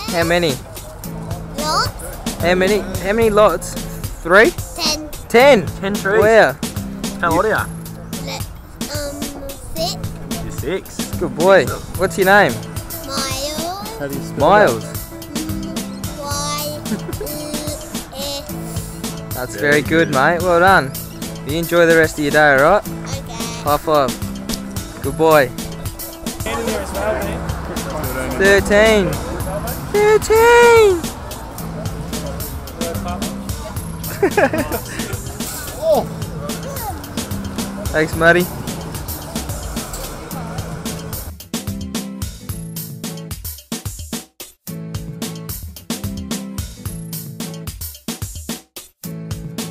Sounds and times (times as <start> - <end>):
Music: 0.0 - 49.7.